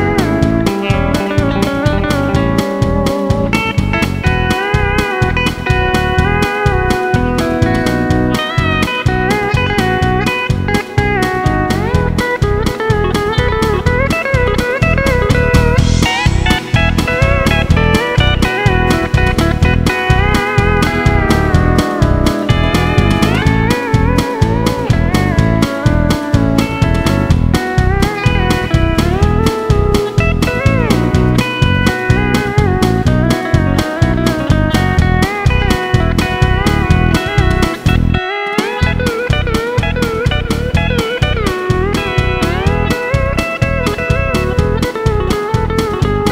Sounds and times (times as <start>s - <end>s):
Plucked string instrument: 0.0s - 46.3s.